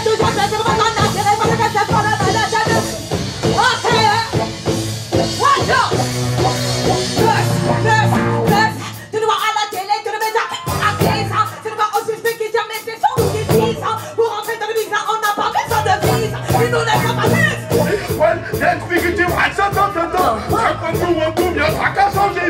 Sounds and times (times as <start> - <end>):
Singing: 9.4 - 22.4
Hip hop music: 15.6 - 22.4.